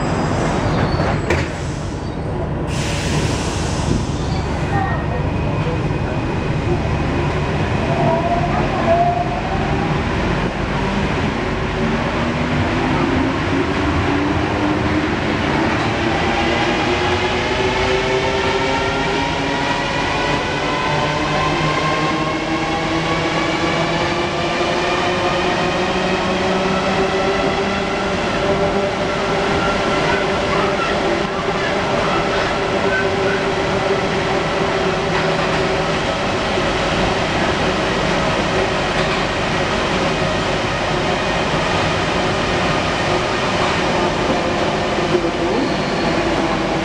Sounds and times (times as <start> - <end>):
Subway, metro, underground: 0.0 - 46.8.